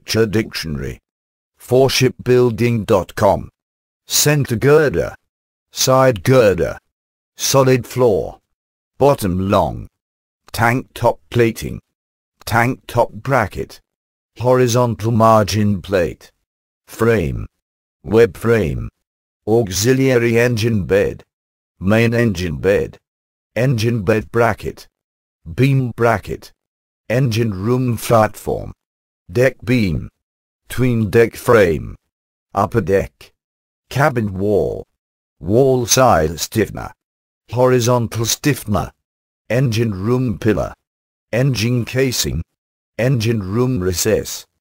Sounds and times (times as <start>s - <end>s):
Speech: 0.0s - 23.0s, 23.6s - 32.0s, 32.6s - 44.6s.